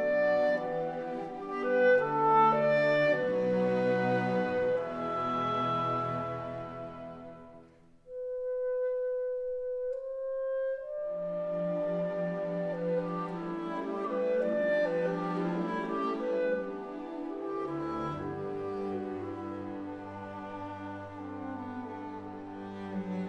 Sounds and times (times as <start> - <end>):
Music: 0.0 - 23.2.